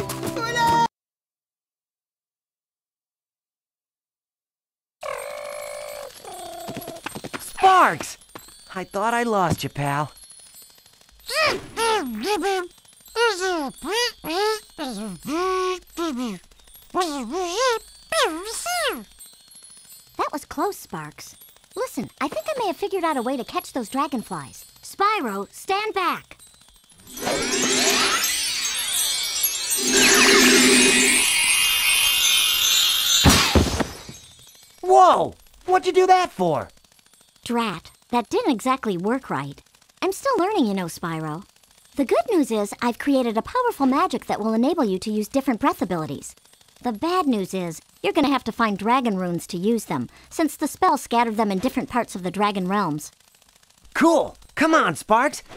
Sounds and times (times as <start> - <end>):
Speech: 7.6 - 10.1, 20.2 - 26.4, 37.5 - 41.4, 42.0 - 53.1, 54.0 - 55.4.